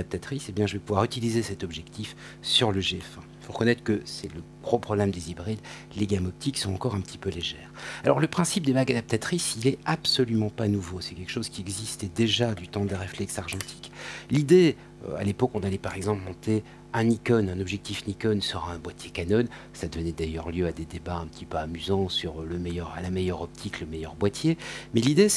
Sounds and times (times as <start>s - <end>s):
Speech: 0.0s - 25.3s.